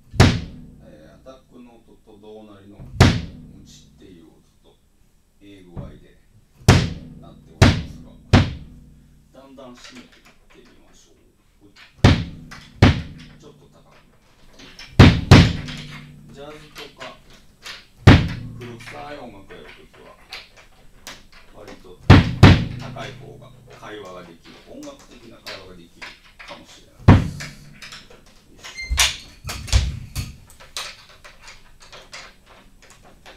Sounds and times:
Bass drum: 0.0 - 1.3, 2.8 - 4.1, 6.6 - 9.4, 12.0 - 14.1, 14.9 - 16.8, 18.0 - 19.3, 22.0 - 23.9, 27.0 - 28.3, 28.9 - 30.5
Speech: 0.8 - 4.8, 5.4 - 8.6, 9.3 - 11.9, 13.3 - 14.8, 15.5 - 17.4, 18.4 - 20.3, 21.5 - 27.7.

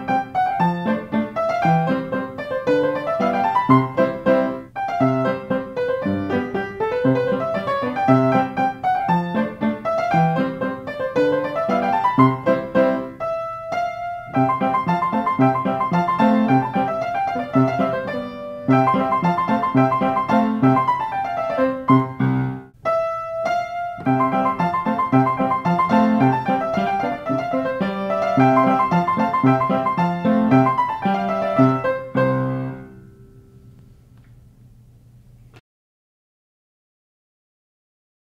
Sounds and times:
Music: 0.0 - 33.9.

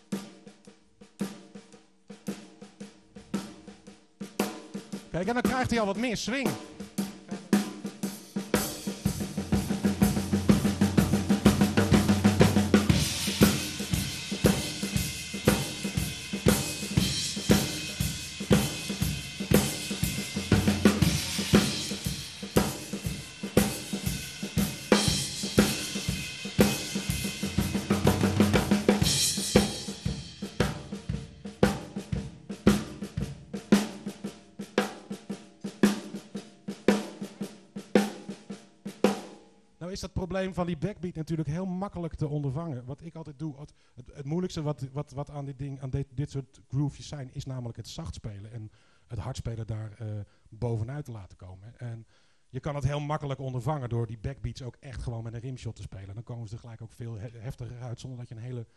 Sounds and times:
Drum: 0.0 - 39.4
Drum kit: 0.0 - 39.4
Cymbal: 6.6 - 39.5.

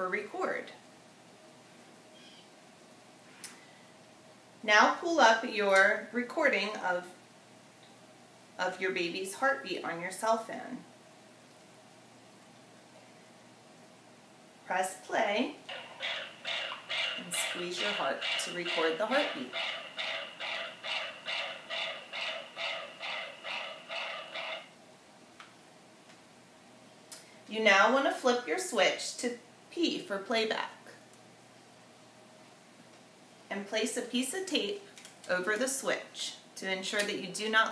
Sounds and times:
Speech: 0.0 - 0.8, 4.7 - 7.2, 8.6 - 10.9, 14.7 - 15.6, 17.2 - 19.5, 27.5 - 31.0, 33.5 - 37.7.

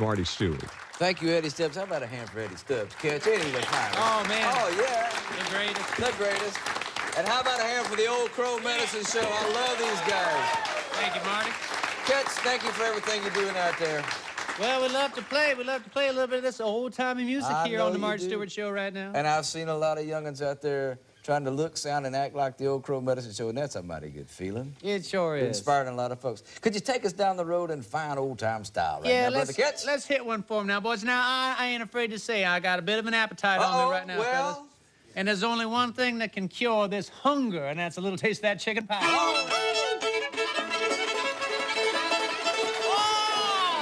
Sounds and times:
Music: 39.0 - 43.8.

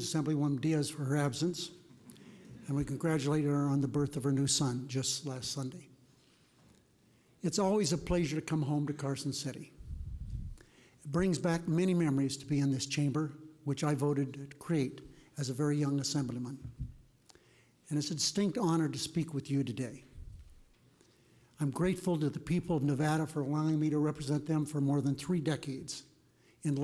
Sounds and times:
Male speech, man speaking: 0.0 - 1.8, 2.6 - 5.9, 7.4 - 9.7, 11.1 - 16.6, 17.9 - 20.1, 21.6 - 26.8
Narration, monologue: 0.0 - 26.8.

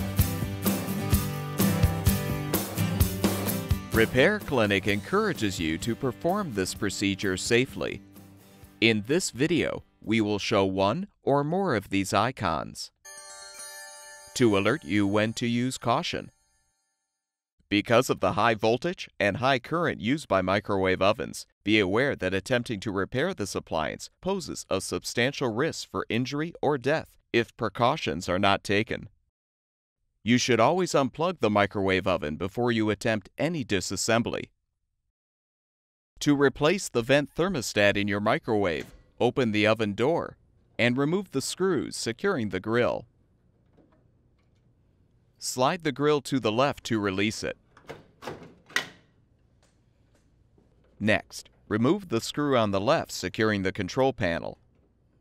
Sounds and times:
Speech: 4.0 - 8.0, 8.8 - 13.0, 14.4 - 16.3, 17.7 - 29.1, 30.3 - 34.5, 36.2 - 43.0, 45.4 - 47.6, 51.0 - 54.6.

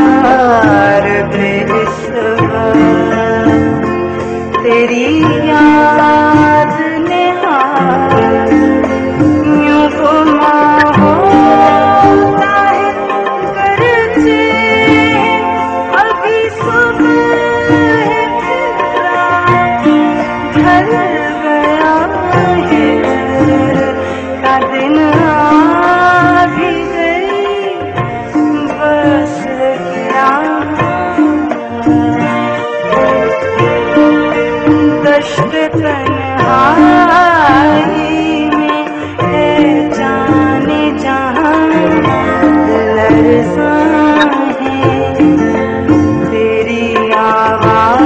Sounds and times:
Music: 0.0 - 48.0.

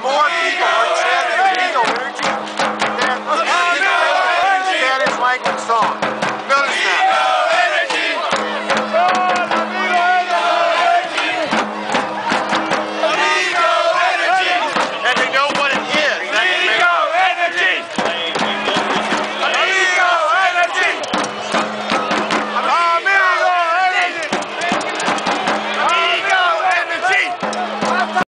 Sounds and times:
Music: 0.3 - 28.2.

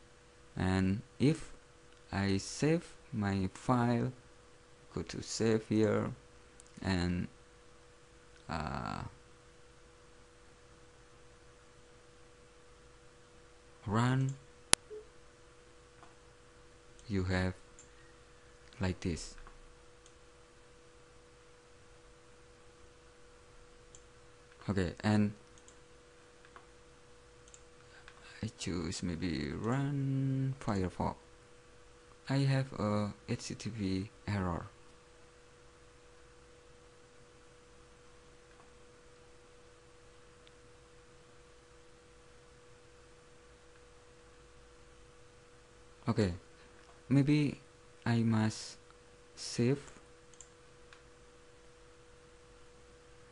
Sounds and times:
Speech: 0.6 - 4.2, 4.9 - 6.2, 6.8 - 7.4, 8.4 - 9.2, 13.8 - 14.4, 17.0 - 17.6, 18.8 - 19.4, 24.6 - 25.4, 28.2 - 31.2, 32.2 - 34.8, 46.0 - 46.5, 47.1 - 48.8, 49.4 - 50.0.

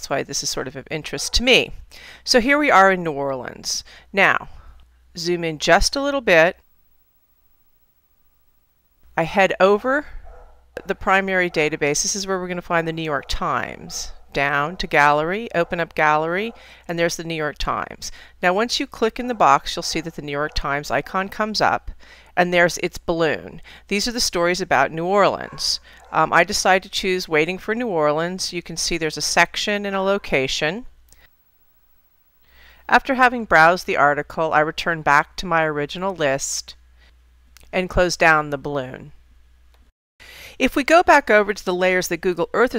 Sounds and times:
Speech: 0.0 - 4.5, 5.2 - 6.6, 9.2 - 10.2, 10.8 - 30.9, 32.9 - 36.8, 37.6 - 39.1, 40.6 - 42.7.

